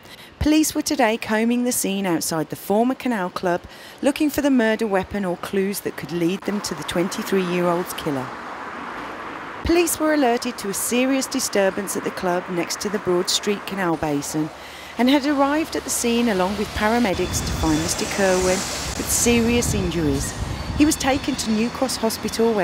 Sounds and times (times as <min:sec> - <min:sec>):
Speech: 0:00.4 - 0:08.3, 0:09.6 - 0:22.6.